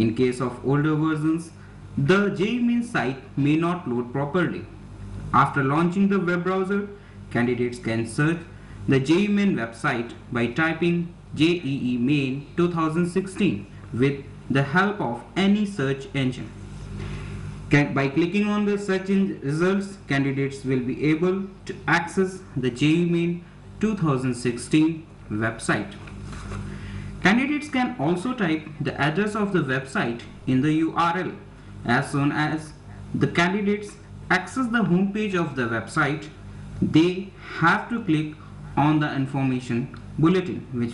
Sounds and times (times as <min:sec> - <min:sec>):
Speech: 0:00.0 - 0:16.6, 0:17.7 - 0:26.1, 0:27.2 - 0:40.9.